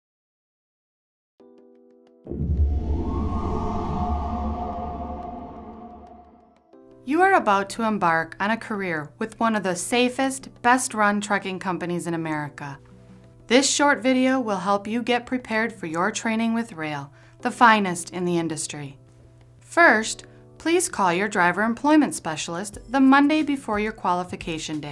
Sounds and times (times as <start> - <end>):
Music: 1.4 - 24.9
Speech: 7.1 - 12.8, 13.5 - 19.0, 19.7 - 24.9.